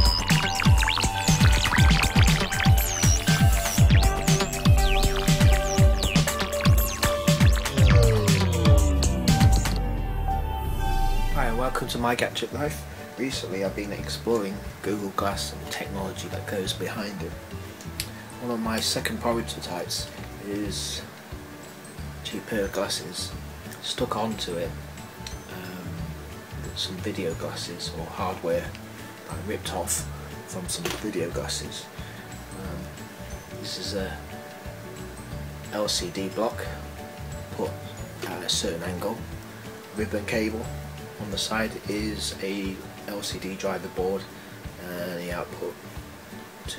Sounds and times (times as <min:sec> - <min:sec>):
Music: 0:00.0 - 0:46.7
Speech: 0:11.4 - 0:17.4, 0:18.4 - 0:21.1, 0:22.2 - 0:24.8, 0:26.6 - 0:31.9, 0:32.6 - 0:32.9, 0:33.6 - 0:34.2, 0:35.7 - 0:36.8, 0:37.5 - 0:39.2, 0:40.0 - 0:45.8.